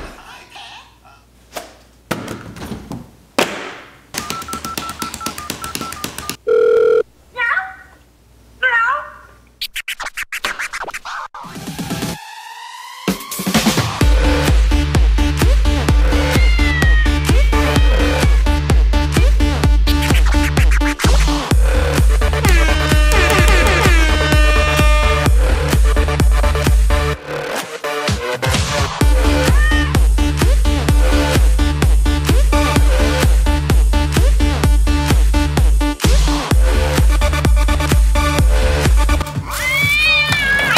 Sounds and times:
Music: 11.4 - 40.7.

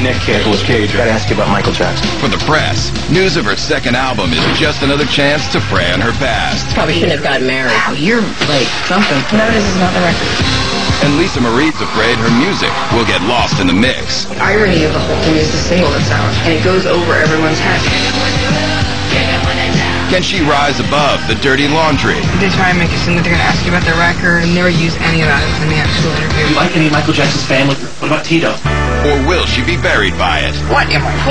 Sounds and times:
Speech: 0.0 - 10.4, 11.0 - 18.0, 20.1 - 31.3
Music: 0.0 - 31.3.

